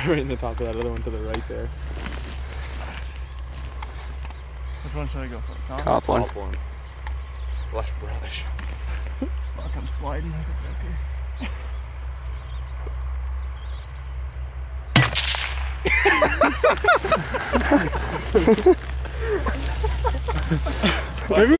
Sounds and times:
Speech: 21.3s - 21.5s.

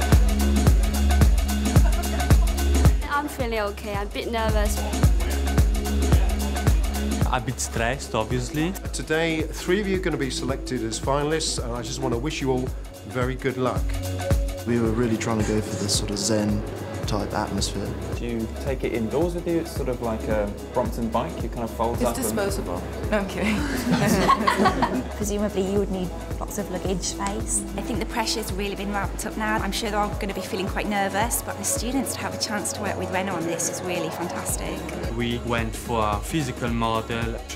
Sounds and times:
Music: 0.0s - 37.5s.

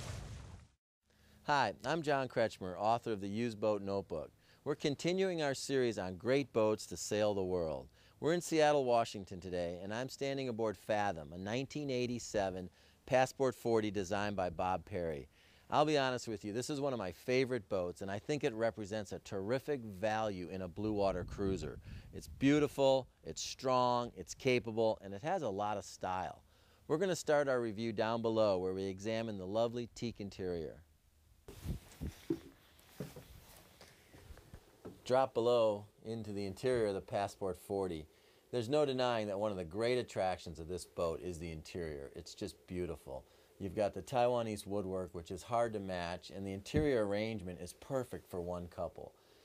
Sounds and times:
Speech: 1.4s - 30.9s, 35.0s - 49.2s.

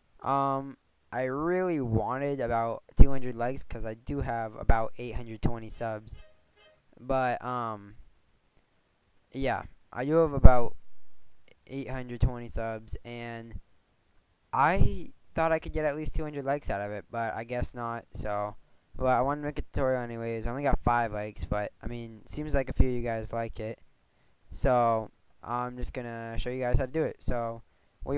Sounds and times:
Speech: 0.2s - 6.3s, 7.0s - 8.0s, 9.3s - 10.8s, 11.5s - 13.6s, 14.5s - 23.8s, 24.5s - 28.1s.

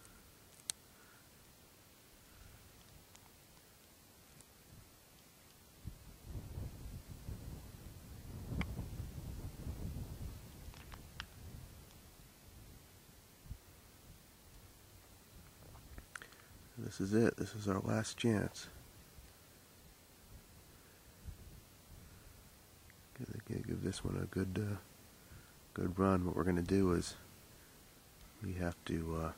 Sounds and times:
Speech: 16.8s - 18.8s, 23.1s - 24.9s, 25.7s - 27.2s, 28.4s - 29.3s.

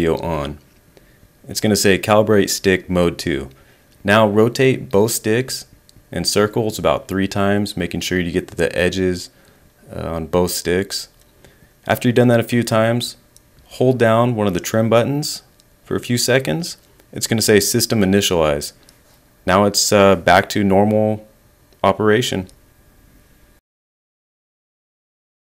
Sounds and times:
Speech: 0.0s - 0.6s, 1.5s - 11.2s, 11.9s - 18.8s, 19.4s - 22.6s.

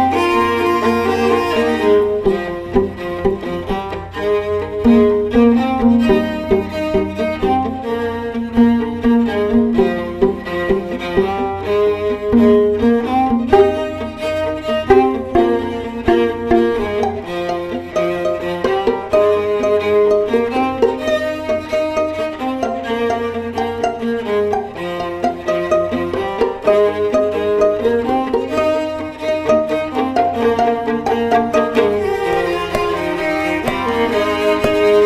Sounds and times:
Pizzicato: 0.0s - 35.0s.

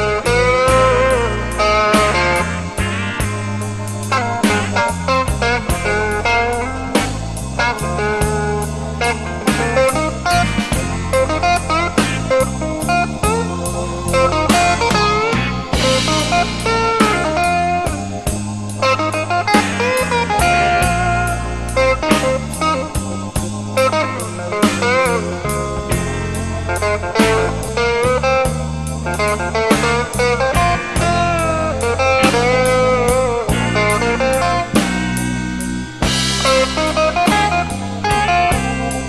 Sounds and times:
Music: 0.0s - 39.0s.

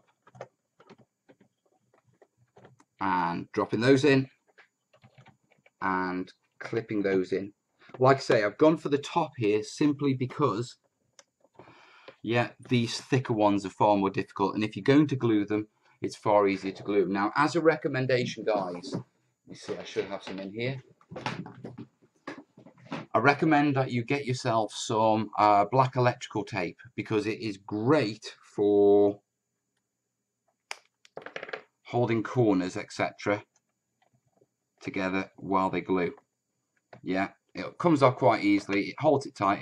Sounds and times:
Speech: 3.0s - 4.3s, 5.8s - 10.7s, 12.3s - 21.8s, 22.9s - 29.2s, 31.9s - 33.4s, 34.9s - 36.2s, 37.1s - 39.6s.

